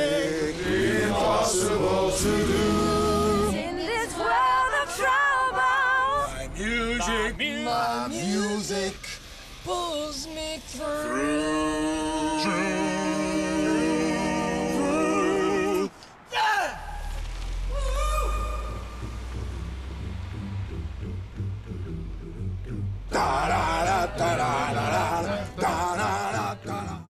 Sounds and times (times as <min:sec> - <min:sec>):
Music: 0:19.0 - 0:27.1.